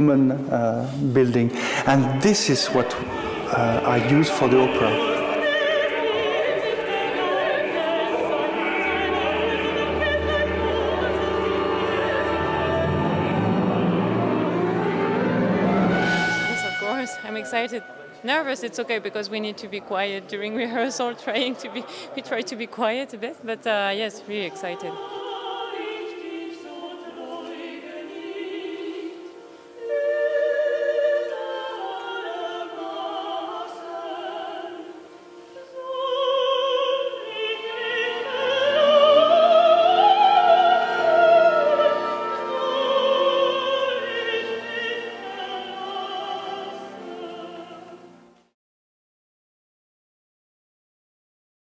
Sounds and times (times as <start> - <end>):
Opera: 0.0 - 48.6.